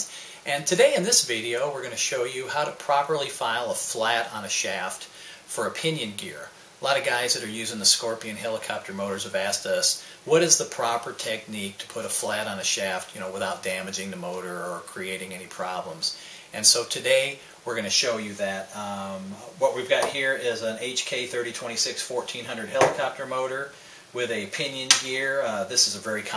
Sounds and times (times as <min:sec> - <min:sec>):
Speech: 0:00.0 - 0:26.3.